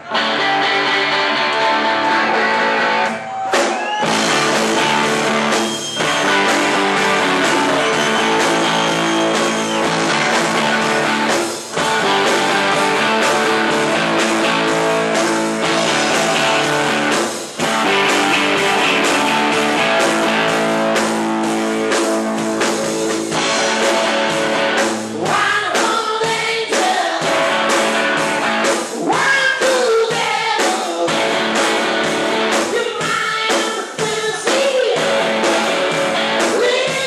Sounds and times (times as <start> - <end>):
Music: 0.0 - 37.0.